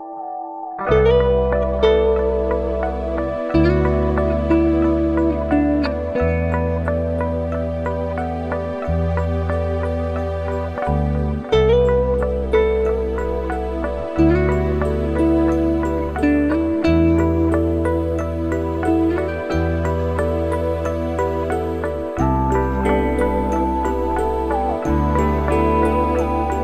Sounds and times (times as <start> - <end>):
Music: 0.0 - 26.6.